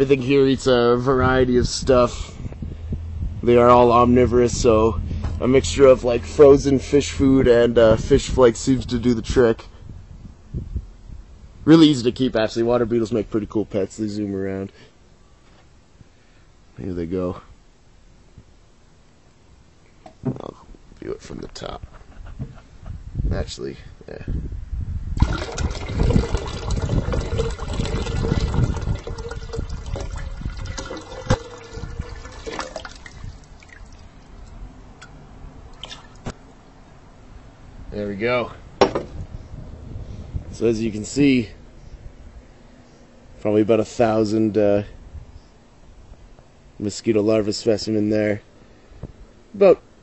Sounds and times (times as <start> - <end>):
Liquid: 25.2 - 36.3.